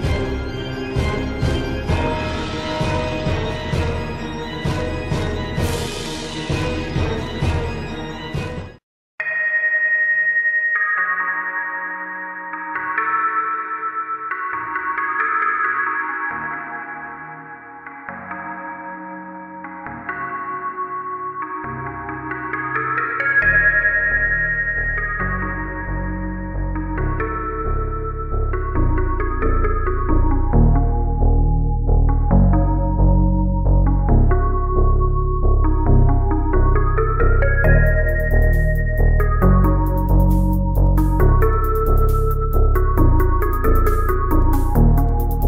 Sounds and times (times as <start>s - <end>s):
Background music: 0.0s - 45.4s.